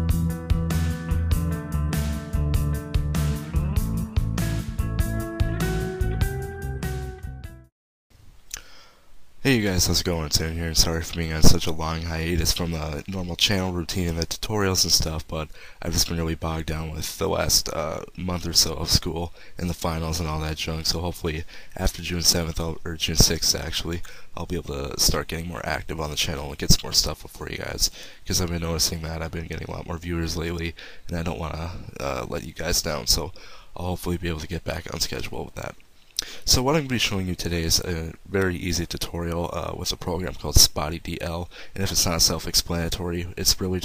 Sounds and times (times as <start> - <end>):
Speech: 9.4 - 43.8.